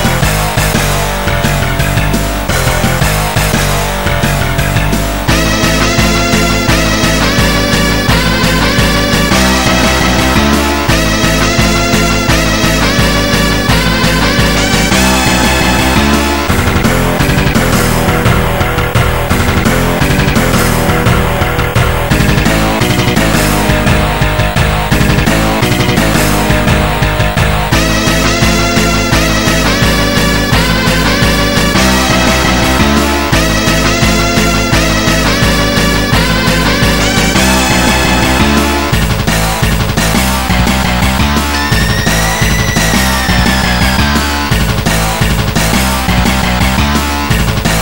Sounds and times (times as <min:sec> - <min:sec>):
Music: 0:00.0 - 0:47.8.